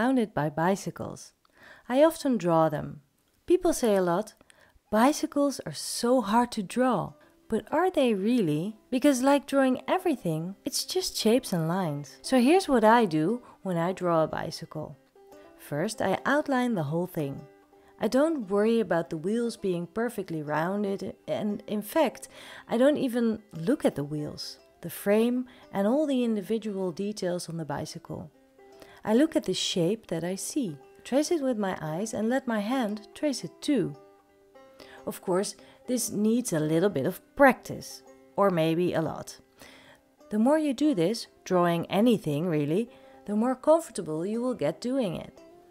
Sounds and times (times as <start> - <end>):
Speech: 0.0 - 15.0, 15.6 - 17.4, 18.0 - 28.3, 29.0 - 34.0, 35.1 - 39.4, 40.3 - 45.3.